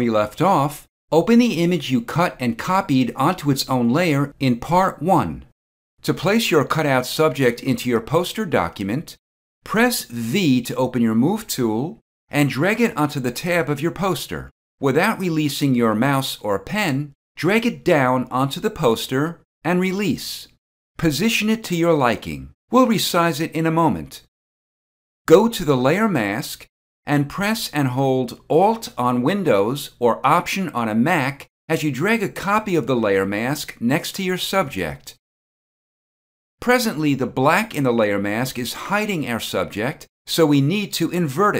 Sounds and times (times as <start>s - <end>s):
Speech: 0.0s - 24.3s, 25.3s - 35.2s, 36.6s - 41.5s.